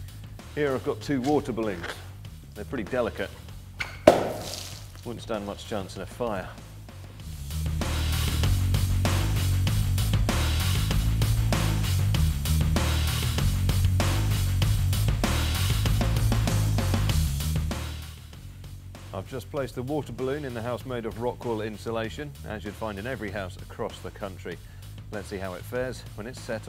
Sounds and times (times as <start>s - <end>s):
Music: 0.0s - 26.6s
Speech: 0.6s - 3.4s, 5.0s - 6.6s, 19.1s - 26.6s.